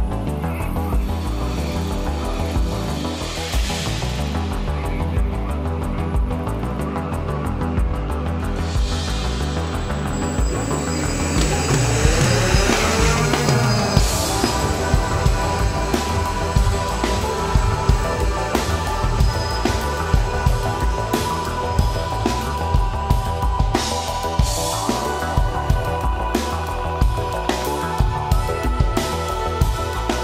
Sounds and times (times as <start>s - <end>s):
New-age music: 0.0s - 30.2s
Rhythm and blues: 0.0s - 30.2s.